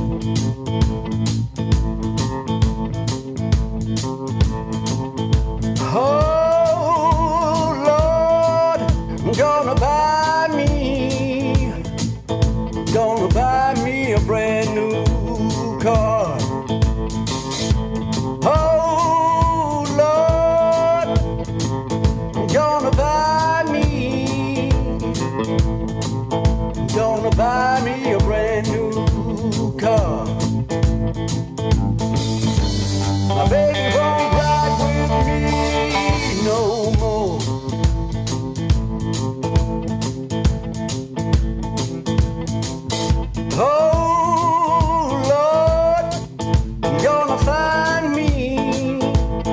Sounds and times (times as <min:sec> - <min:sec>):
Blues: 0:00.0 - 0:49.5.